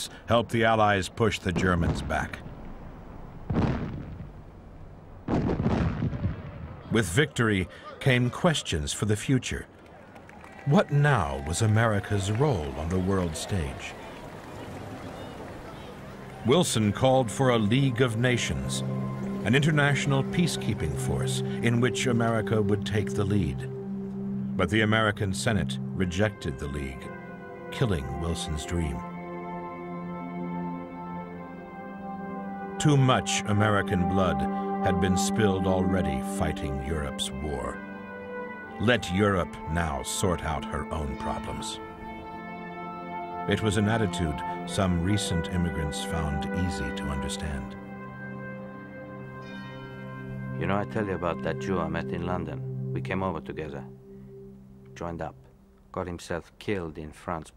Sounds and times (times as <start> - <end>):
Speech: 0.0 - 2.4, 6.9 - 9.7, 10.7 - 14.0, 15.8 - 18.8, 19.4 - 23.7, 24.6 - 27.1, 27.8 - 29.0, 32.8 - 37.8, 38.8 - 41.8, 43.5 - 47.7, 50.6 - 53.9, 55.0 - 57.5
Music: 10.4 - 56.9.